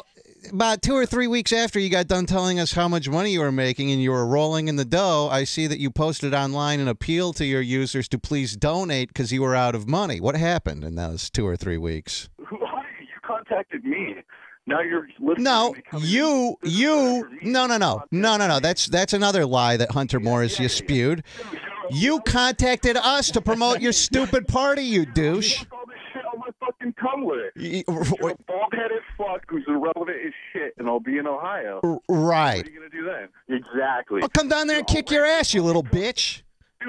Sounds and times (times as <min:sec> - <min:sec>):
Speech: 0:00.0 - 0:36.8.